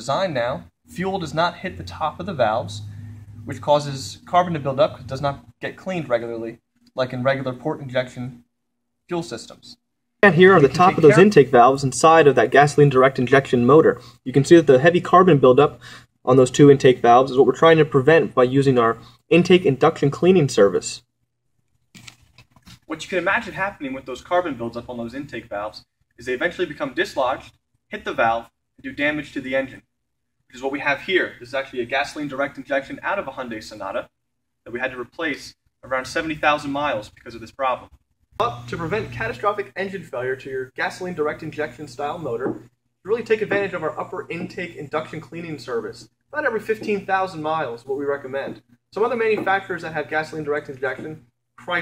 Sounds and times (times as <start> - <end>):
Speech: 0.0 - 2.8, 3.4 - 8.4, 9.1 - 21.0, 22.9 - 29.8, 30.5 - 34.1, 34.7 - 51.8.